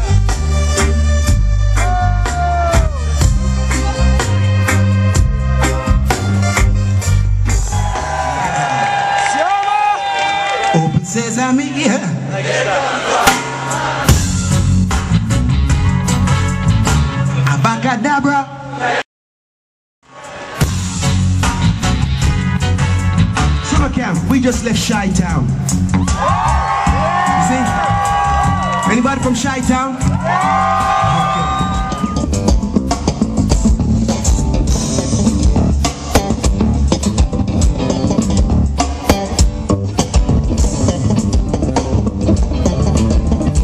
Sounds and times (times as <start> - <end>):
Rimshot: 35.9 - 36.6.